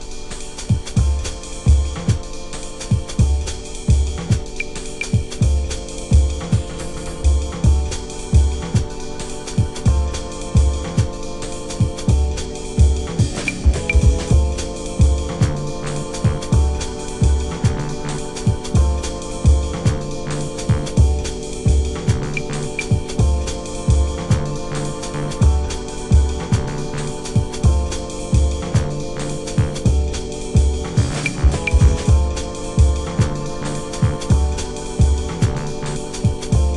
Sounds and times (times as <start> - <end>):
Bass drum: 0.7 - 2.2, 2.9 - 4.6, 5.2 - 9.0, 9.6 - 11.2, 11.8 - 36.7.